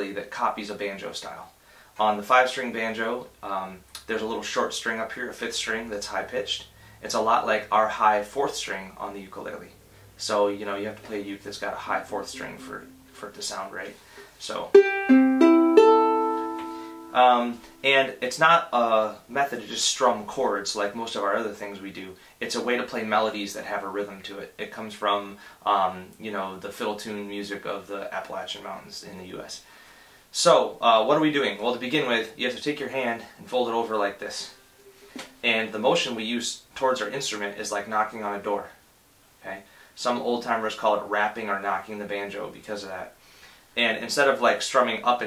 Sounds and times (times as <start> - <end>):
Speech: 0.0 - 14.8, 17.2 - 29.7, 30.3 - 34.6, 35.2 - 38.8, 39.4 - 43.2, 43.8 - 45.2
Inside, small room: 0.0 - 45.2
Ukulele: 11.8 - 17.9, 34.4 - 35.7.